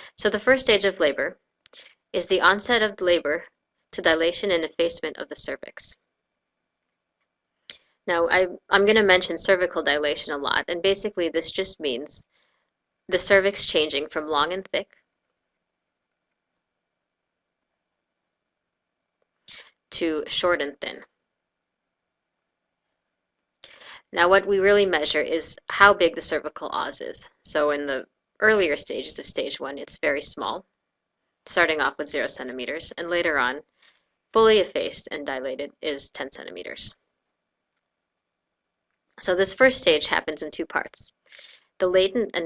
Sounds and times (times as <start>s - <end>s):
Narration, monologue: 0.0s - 42.4s.